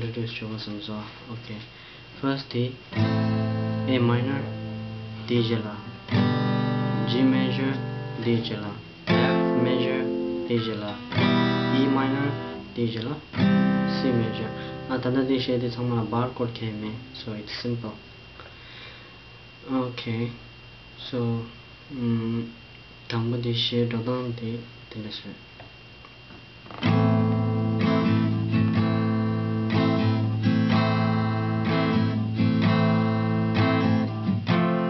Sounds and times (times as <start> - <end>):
Speech: 0.0 - 2.8, 3.9 - 4.5, 5.3 - 6.0, 7.0 - 11.0, 11.7 - 13.3, 13.9 - 18.0, 19.6 - 20.4, 21.0 - 25.4
Strum: 2.9 - 15.8, 26.6 - 34.8
Acoustic guitar: 2.9 - 17.3, 26.6 - 34.8.